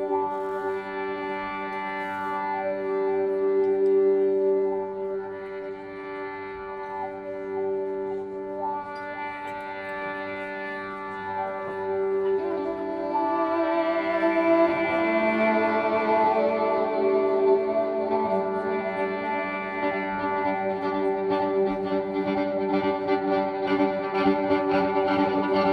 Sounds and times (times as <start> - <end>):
Violin, fiddle: 0.0 - 25.7.